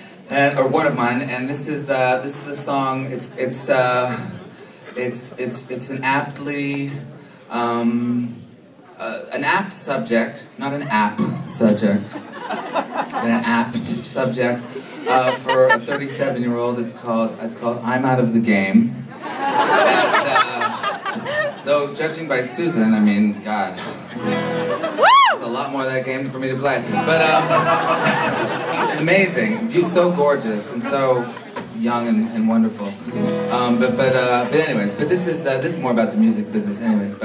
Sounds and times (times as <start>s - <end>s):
Speech: 0.3s - 12.2s, 13.1s - 19.0s, 19.7s - 20.9s, 21.6s - 24.0s, 25.4s - 27.6s, 28.7s - 37.2s.